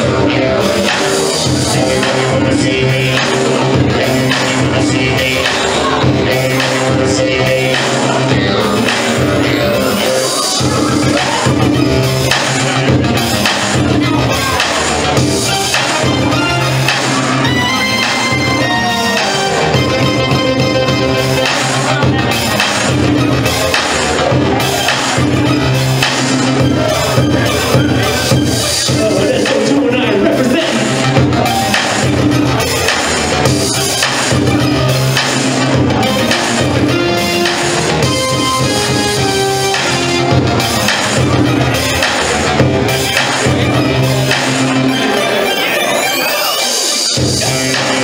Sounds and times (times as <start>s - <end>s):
Speech: 0.0s - 19.8s, 21.2s - 32.0s
Music: 0.0s - 48.0s.